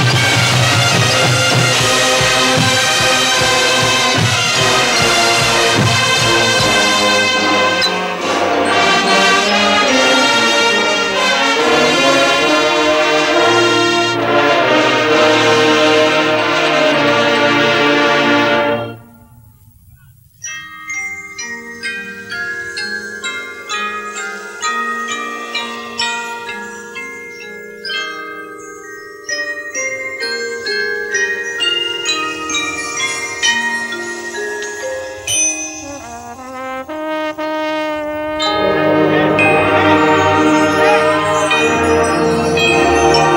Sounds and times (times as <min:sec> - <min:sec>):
Glockenspiel: 0:00.0 - 0:14.5, 0:18.7 - 0:43.3
Marimba, xylophone: 0:00.0 - 0:14.5, 0:20.0 - 0:36.7, 0:38.3 - 0:43.3.